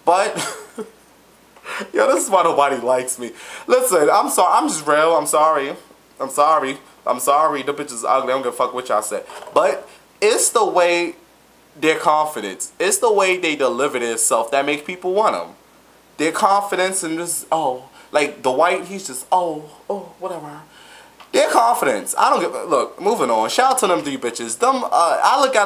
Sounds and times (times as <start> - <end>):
Speech: 0.0 - 0.4, 1.8 - 11.2, 11.8 - 15.6, 16.2 - 20.7, 21.3 - 25.6
Inside, small room: 0.0 - 25.6.